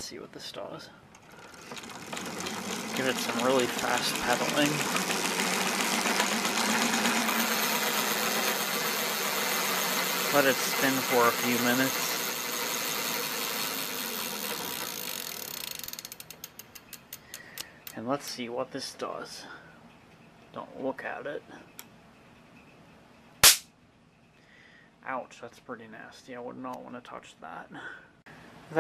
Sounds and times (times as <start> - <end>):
Speech: 0.0 - 1.0, 3.0 - 4.8, 10.3 - 12.0, 18.0 - 19.6, 20.5 - 21.7, 25.0 - 28.0
Bicycle: 1.1 - 17.6.